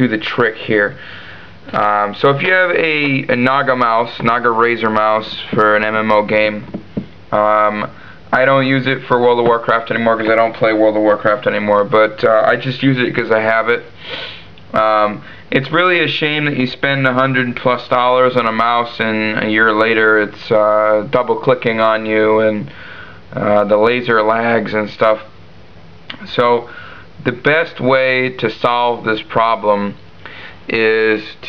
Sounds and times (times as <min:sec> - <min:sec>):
Speech: 0:00.0 - 0:01.0, 0:01.7 - 0:13.9, 0:14.7 - 0:22.7, 0:23.3 - 0:25.4, 0:26.1 - 0:30.0, 0:30.7 - 0:31.4.